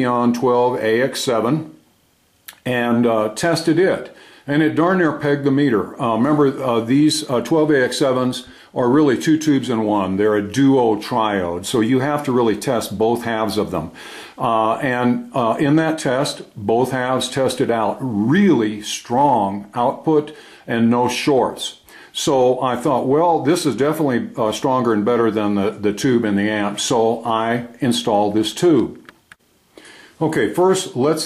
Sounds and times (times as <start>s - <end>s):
Speech: 0.0s - 1.8s, 2.5s - 29.1s, 30.2s - 31.2s.